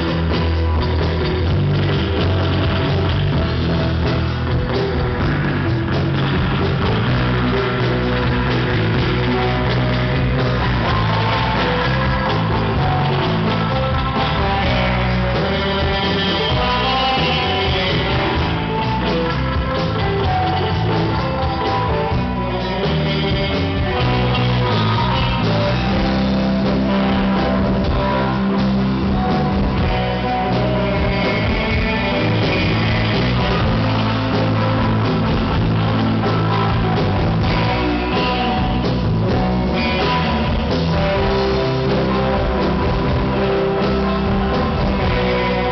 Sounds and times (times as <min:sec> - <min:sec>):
Electric guitar: 0:00.0 - 0:45.7.